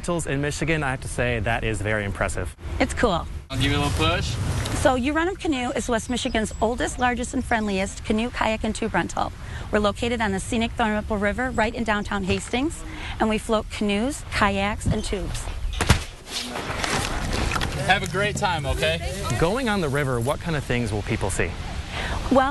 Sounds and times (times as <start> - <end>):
Speech: 0.0 - 15.4.